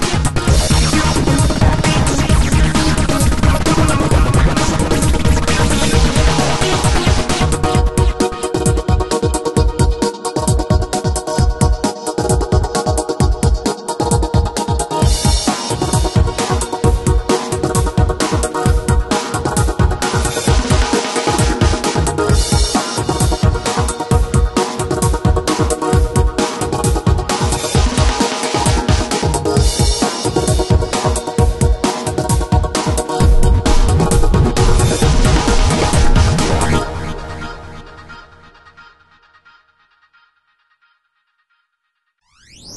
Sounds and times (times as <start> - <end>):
Trance music: 0.0 - 39.4.